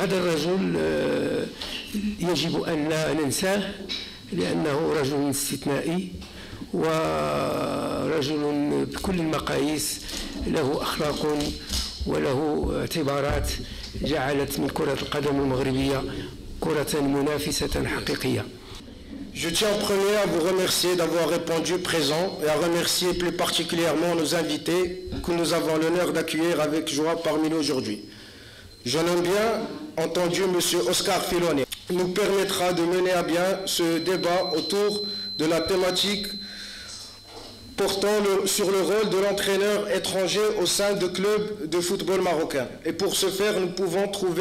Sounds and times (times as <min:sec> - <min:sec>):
Speech: 0:00.0 - 0:18.6, 0:19.4 - 0:28.0, 0:28.8 - 0:36.4, 0:37.8 - 0:44.4.